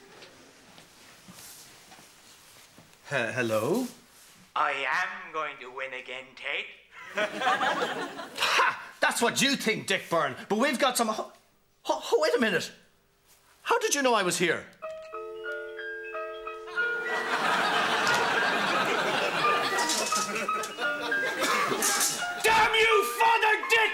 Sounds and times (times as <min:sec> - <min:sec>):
Speech: 0:03.1 - 0:04.0, 0:04.6 - 0:06.8, 0:09.0 - 0:12.8, 0:13.6 - 0:14.7, 0:22.4 - 0:23.9
Music: 0:14.8 - 0:23.9.